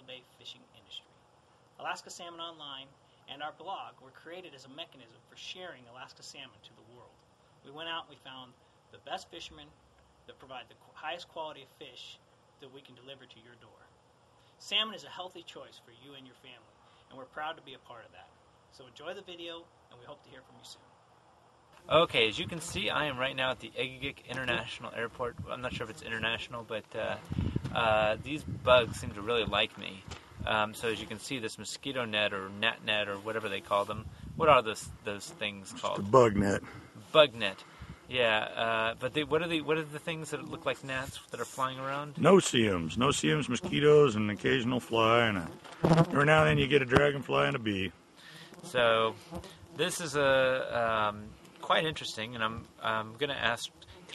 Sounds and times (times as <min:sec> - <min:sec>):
Speech: 0:00.0 - 0:01.1, 0:01.8 - 0:09.7, 0:10.3 - 0:13.9, 0:14.6 - 0:20.8, 0:21.9 - 0:27.2, 0:27.8 - 0:47.9, 0:48.7 - 0:49.2, 0:49.8 - 0:53.8.